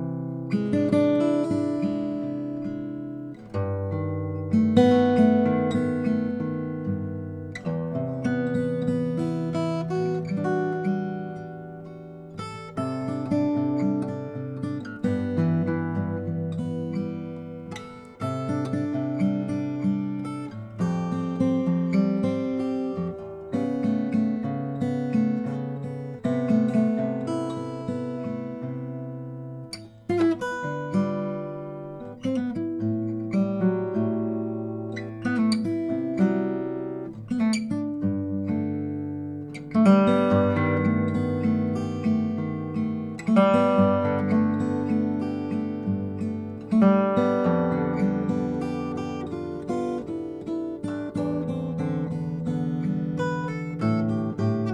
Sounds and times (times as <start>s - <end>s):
Music: 0.0s - 54.7s.